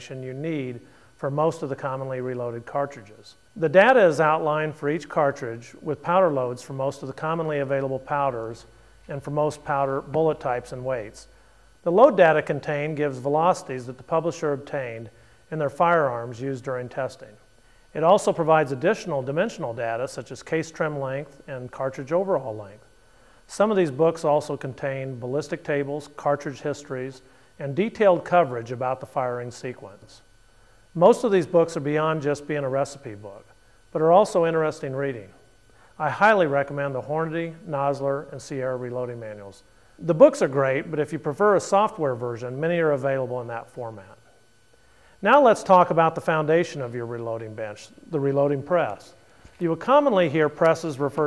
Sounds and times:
Speech: 0:00.0 - 0:17.4, 0:18.0 - 0:22.9, 0:23.5 - 0:30.3, 0:31.0 - 0:35.4, 0:36.0 - 0:44.3, 0:45.2 - 0:51.2.

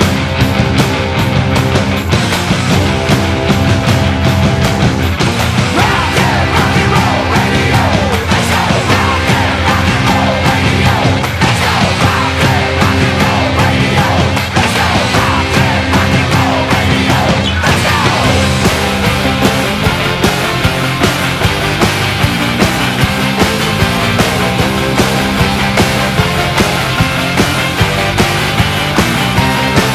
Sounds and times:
Music: 0:00.0 - 0:29.9.

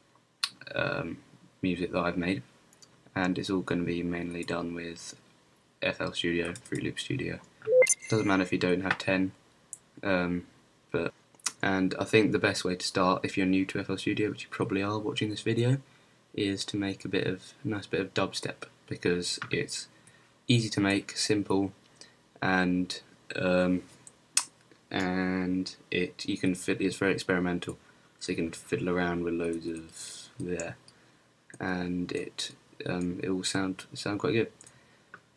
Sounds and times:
Speech: 0:00.5 - 0:02.5, 0:03.2 - 0:05.2, 0:05.8 - 0:09.4, 0:10.0 - 0:19.9, 0:20.5 - 0:21.8, 0:22.4 - 0:23.9, 0:24.9 - 0:30.8, 0:31.6 - 0:34.6.

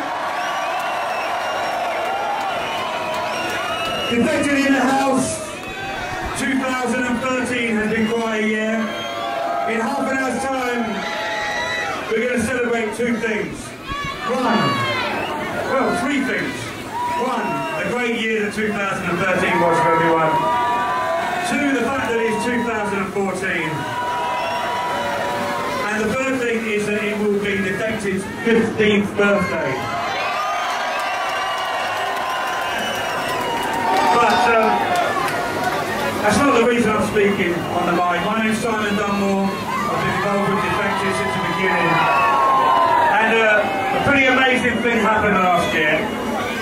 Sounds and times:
Speech: 0:04.1 - 0:05.5, 0:06.4 - 0:08.9, 0:09.7 - 0:11.0, 0:12.1 - 0:14.9, 0:15.7 - 0:20.4, 0:21.4 - 0:23.8, 0:25.8 - 0:29.9, 0:34.1 - 0:34.8, 0:36.2 - 0:42.2, 0:43.1 - 0:46.1.

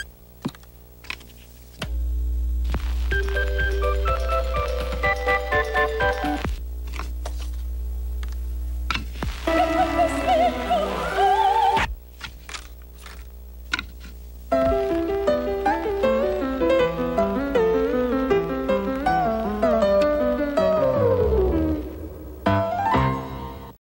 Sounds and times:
Music: 0:02.7 - 0:06.6, 0:09.2 - 0:11.9, 0:14.5 - 0:23.8.

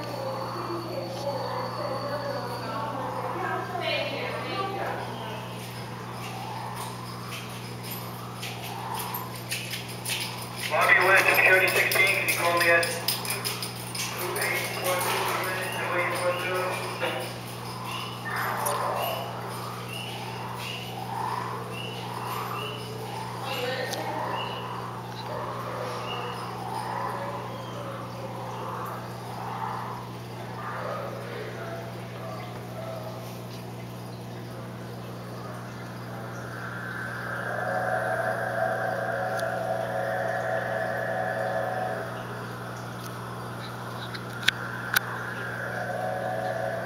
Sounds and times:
Speech: 0:02.4 - 0:05.5, 0:10.7 - 0:13.1, 0:14.2 - 0:17.3, 0:23.4 - 0:24.5.

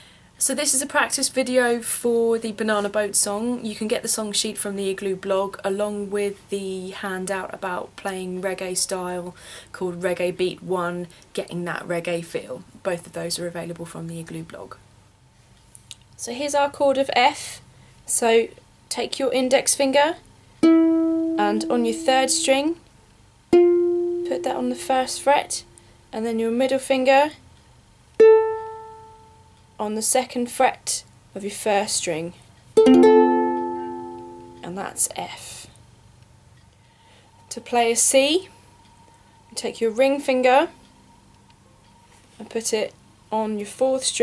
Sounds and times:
Speech: 0:00.4 - 0:14.8, 0:16.2 - 0:20.2, 0:21.4 - 0:22.8, 0:24.3 - 0:27.4, 0:29.8 - 0:32.4, 0:34.6 - 0:35.8, 0:37.5 - 0:38.5, 0:39.5 - 0:40.8, 0:42.4 - 0:44.2
Music: 0:20.6 - 0:22.7, 0:23.5 - 0:25.6, 0:28.2 - 0:29.6, 0:32.8 - 0:34.7.

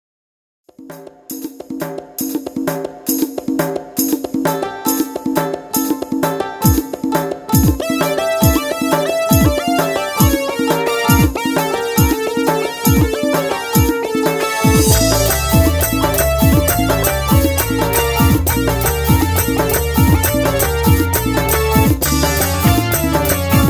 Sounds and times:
Music: 0:00.7 - 0:23.6.

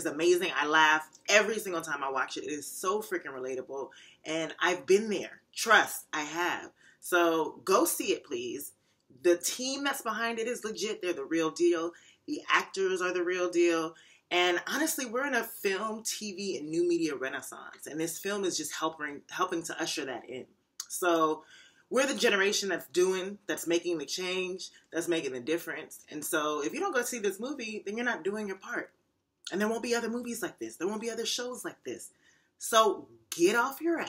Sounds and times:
Speech: 0:00.0 - 0:28.9, 0:29.5 - 0:34.0.

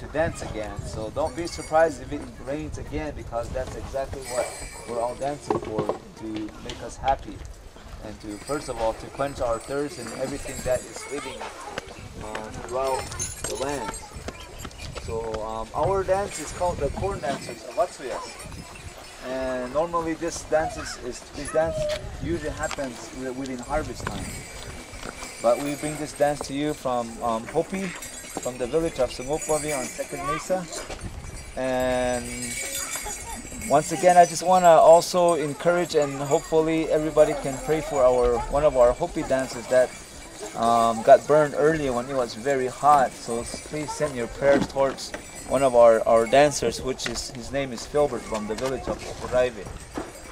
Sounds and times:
Speech: 0:25.4 - 0:30.7.

